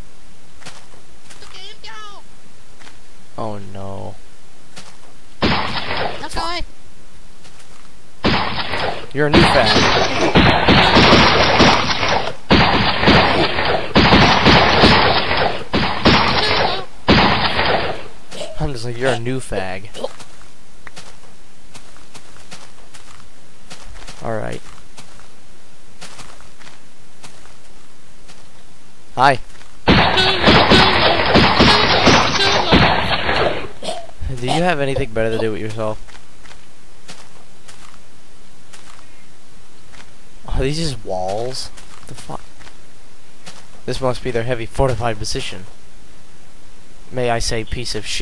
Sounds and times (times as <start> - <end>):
Run: 7.4 - 7.9, 20.1 - 25.4, 26.0 - 28.6, 36.0 - 38.0, 38.6 - 39.1
Speech: 18.4 - 20.1, 24.2 - 24.6, 34.2 - 36.0, 40.5 - 42.4, 43.9 - 45.7, 47.1 - 48.2.